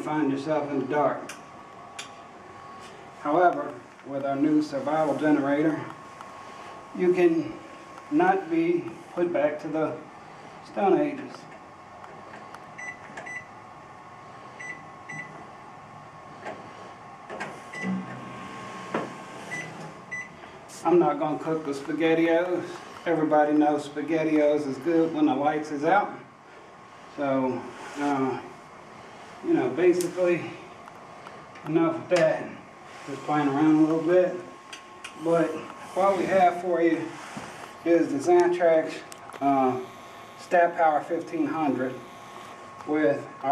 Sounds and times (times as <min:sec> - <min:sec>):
Speech: 0:00.0 - 0:01.3, 0:03.2 - 0:05.9, 0:07.0 - 0:11.5, 0:20.7 - 0:26.3, 0:27.2 - 0:28.5, 0:29.4 - 0:30.6, 0:31.6 - 0:34.6, 0:35.2 - 0:37.2, 0:37.8 - 0:42.1, 0:42.9 - 0:43.5.